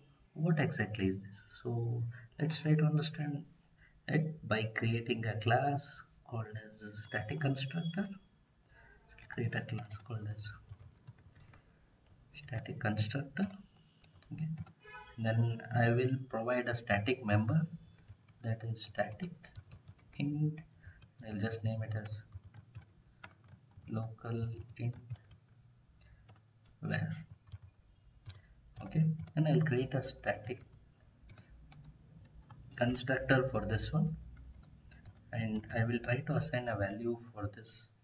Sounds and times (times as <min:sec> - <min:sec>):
Speech: 0:00.4 - 0:03.5, 0:04.1 - 0:08.2, 0:09.1 - 0:10.6, 0:12.4 - 0:13.6, 0:14.3 - 0:14.6, 0:15.2 - 0:17.8, 0:18.4 - 0:19.5, 0:20.2 - 0:20.6, 0:21.2 - 0:22.3, 0:23.9 - 0:25.0, 0:26.8 - 0:27.2, 0:28.8 - 0:30.6, 0:32.8 - 0:34.2, 0:35.3 - 0:38.0.